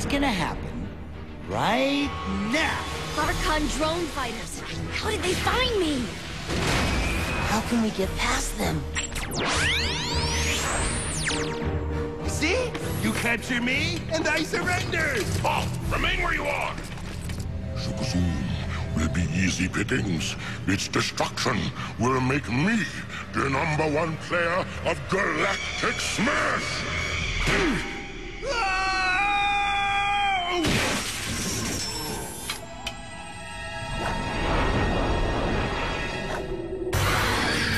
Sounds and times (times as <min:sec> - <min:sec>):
Music: 0:00.0 - 0:37.7.